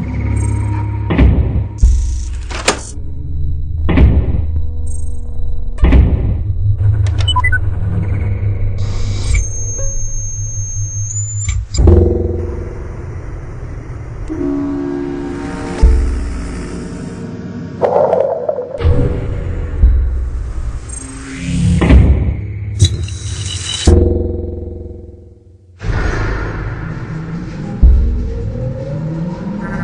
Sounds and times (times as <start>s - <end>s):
Music: 0.0s - 29.8s
Sound effect: 0.0s - 29.8s.